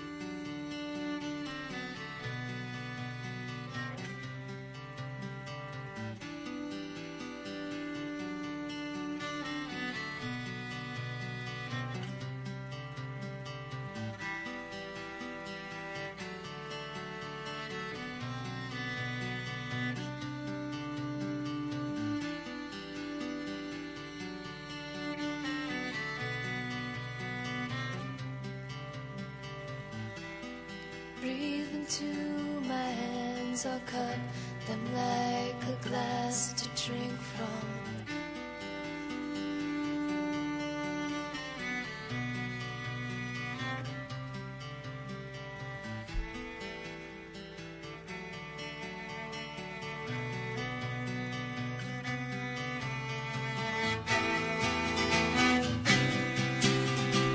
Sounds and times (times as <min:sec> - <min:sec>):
Cello: 0:00.0 - 0:57.3.